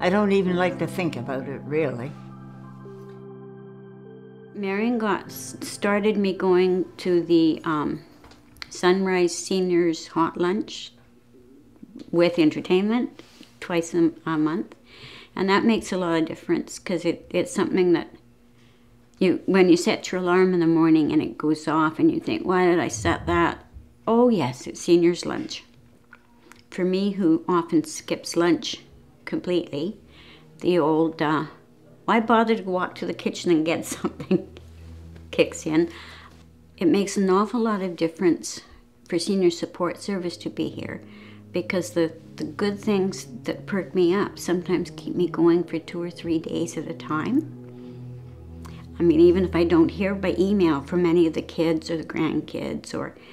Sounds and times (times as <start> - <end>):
Speech: 0.0 - 2.2, 12.0 - 14.8, 15.4 - 18.2, 19.2 - 25.7, 30.6 - 34.5, 36.8 - 41.0, 41.6 - 47.4, 49.0 - 53.2
Inside, small room: 0.0 - 53.3.